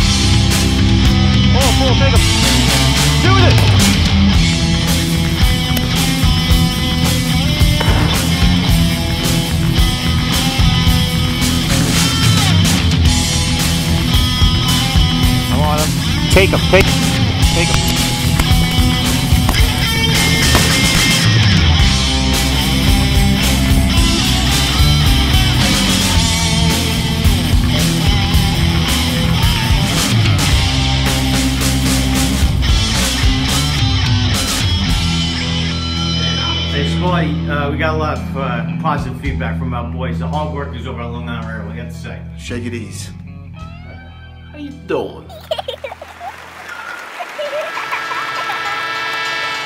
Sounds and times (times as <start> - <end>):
Punk rock: 0.0 - 36.0.